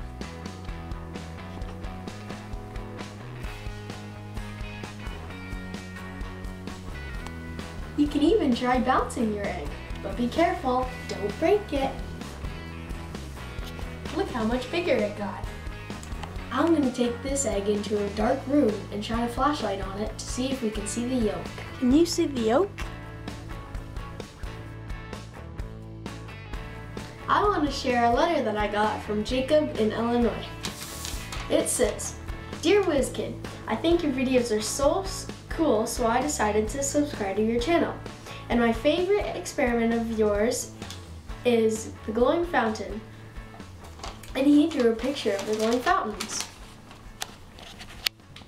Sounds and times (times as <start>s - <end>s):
Music: 0.0s - 48.4s
Child speech, kid speaking: 8.0s - 12.1s, 14.1s - 15.5s, 16.5s - 22.8s, 27.3s - 30.6s, 31.5s - 40.7s, 41.4s - 43.1s, 44.3s - 46.5s.